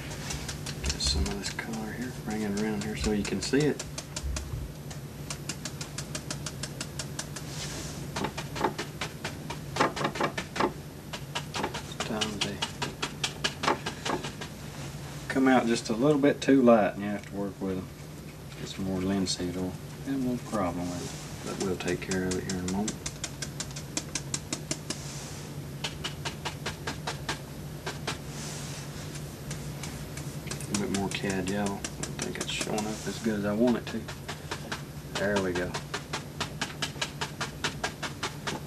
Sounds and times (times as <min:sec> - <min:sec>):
Speech: 0:00.9 - 0:03.8, 0:12.0 - 0:12.7, 0:15.3 - 0:17.9, 0:18.6 - 0:23.0, 0:30.7 - 0:34.1, 0:35.2 - 0:35.8.